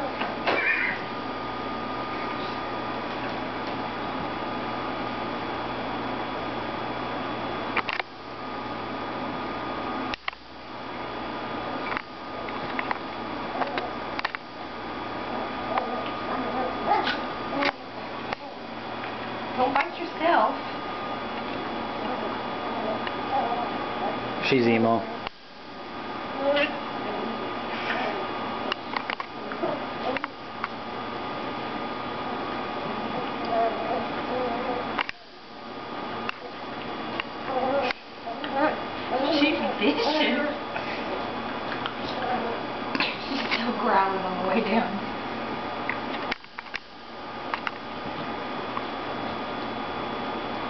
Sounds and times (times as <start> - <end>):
Speech: 24.4 - 25.1, 39.2 - 40.6.